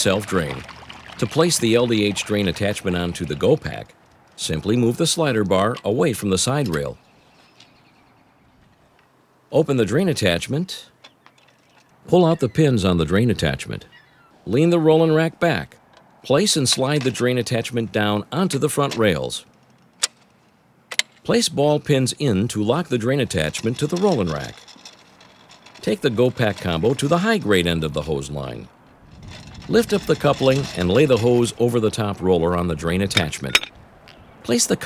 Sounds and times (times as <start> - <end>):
Speech: 0.0 - 7.0, 9.5 - 10.9, 12.1 - 19.5, 21.3 - 24.6, 25.8 - 28.7, 29.7 - 33.7, 34.4 - 34.8.